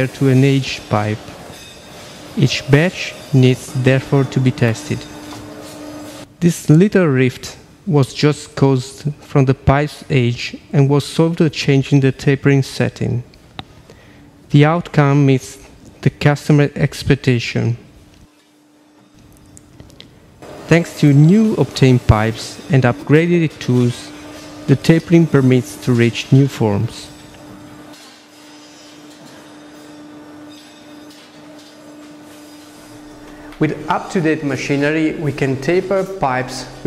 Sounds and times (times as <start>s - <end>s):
Speech: 0.0s - 1.3s, 2.4s - 5.1s, 6.4s - 13.3s, 14.5s - 17.9s, 20.7s - 27.2s, 33.6s - 36.8s.